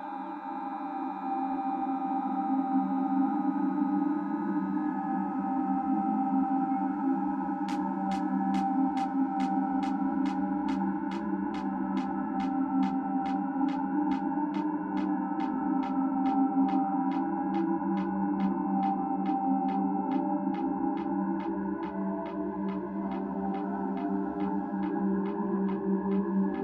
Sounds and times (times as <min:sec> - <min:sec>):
Music: 0:00.0 - 0:26.6.